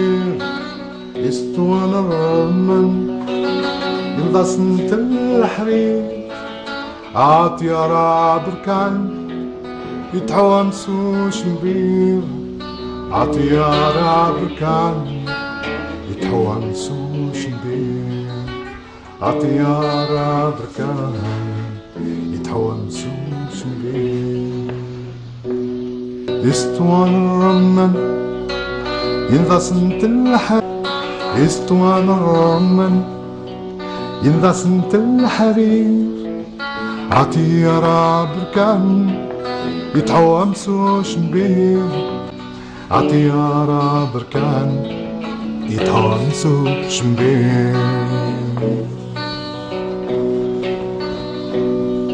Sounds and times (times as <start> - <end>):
Singing: 0.0 - 9.3, 10.0 - 25.3, 26.4 - 33.3, 34.0 - 49.2
Blues: 0.0 - 52.1
Guitar: 0.0 - 52.1.